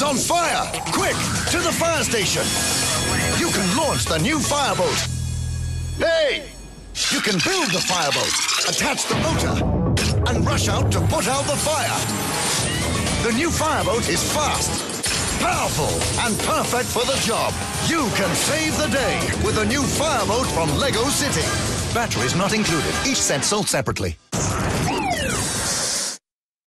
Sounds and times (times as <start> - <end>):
Music: 0.0 - 7.0, 9.0 - 26.2
Speech: 6.0 - 9.6, 10.2 - 12.0, 15.4 - 24.2.